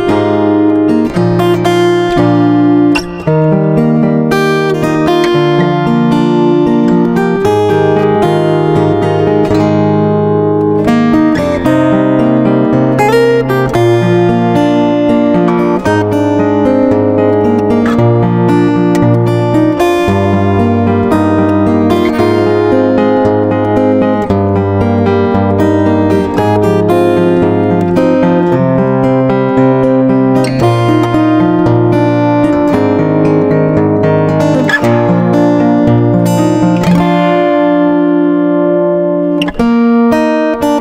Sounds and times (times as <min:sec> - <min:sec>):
Strum: 0:00.0 - 0:40.8.